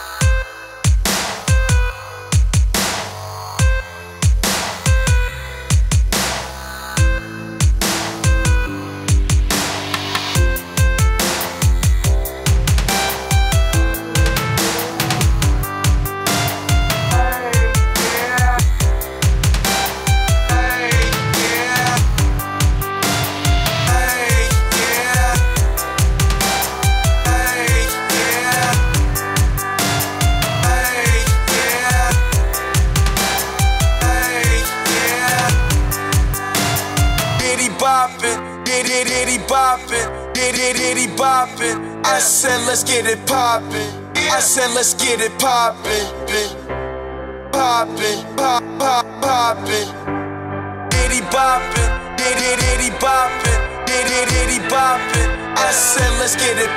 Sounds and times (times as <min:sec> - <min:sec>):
Dubstep: 0:00.0 - 0:45.4, 0:50.9 - 0:56.7.